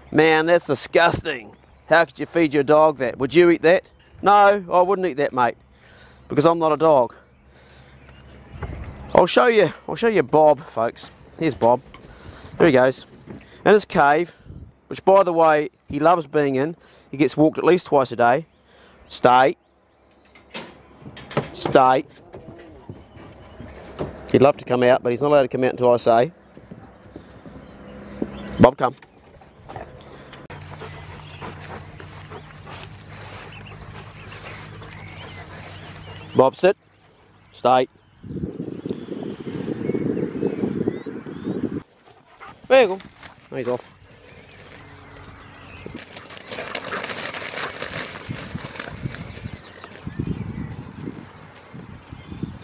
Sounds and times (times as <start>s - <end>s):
Speech: 0.1s - 5.6s, 6.3s - 7.2s, 9.1s - 11.8s, 12.6s - 18.5s, 19.1s - 19.6s, 21.6s - 22.9s, 24.3s - 26.4s, 28.6s - 29.0s, 36.4s - 36.8s, 37.6s - 37.9s, 42.7s - 43.8s.